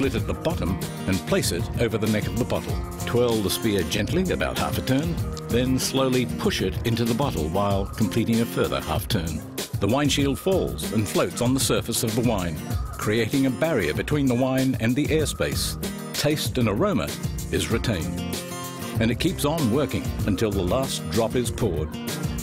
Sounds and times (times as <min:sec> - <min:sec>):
Speech: 0:00.0 - 0:18.2, 0:19.0 - 0:22.0
Music: 0:00.0 - 0:22.4.